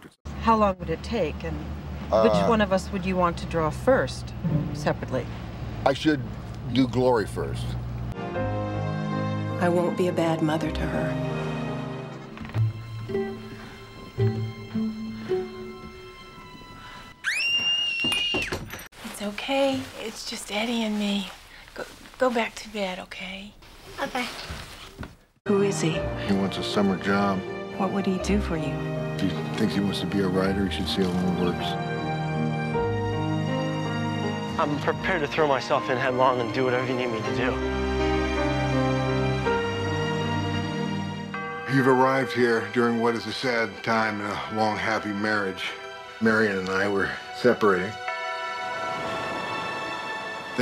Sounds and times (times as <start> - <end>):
Music: 2.3 - 5.4, 7.5 - 17.4, 25.5 - 50.6.